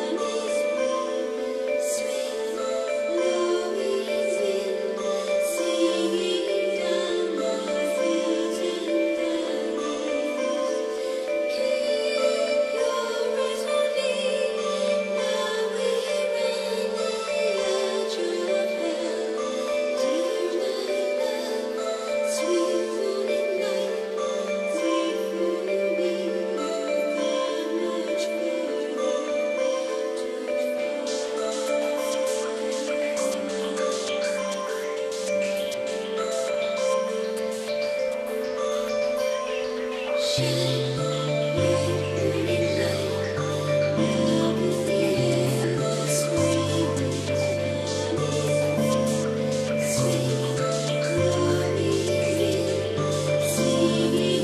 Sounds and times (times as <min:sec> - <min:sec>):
Marimba, xylophone: 0:00.0 - 0:54.4.